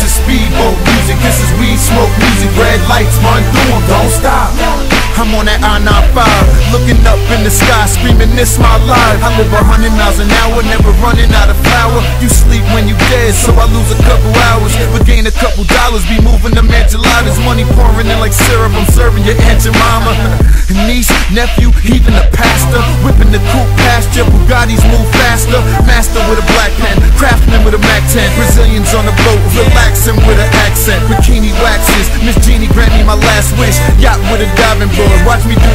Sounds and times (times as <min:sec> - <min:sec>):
Rhythm and blues: 0:00.0 - 0:35.7.